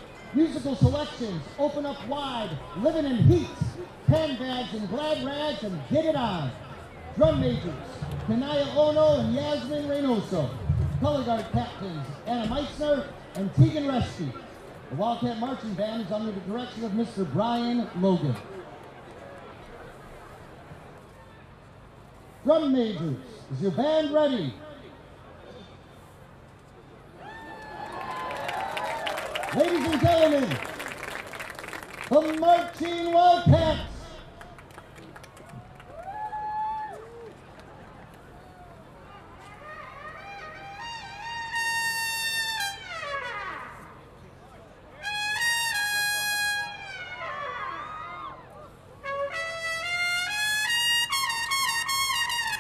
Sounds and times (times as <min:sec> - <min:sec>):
Speech: 0:00.3 - 0:18.5, 0:22.4 - 0:24.7, 0:29.5 - 0:30.6, 0:32.1 - 0:34.3.